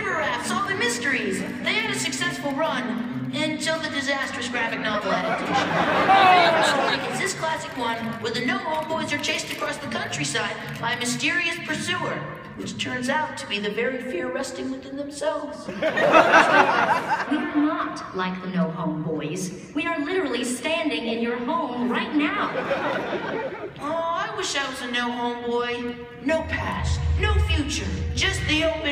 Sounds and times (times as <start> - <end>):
Speech: 0.0 - 15.7, 17.2 - 22.7, 23.8 - 28.9
Music: 0.0 - 15.8, 23.7 - 28.9.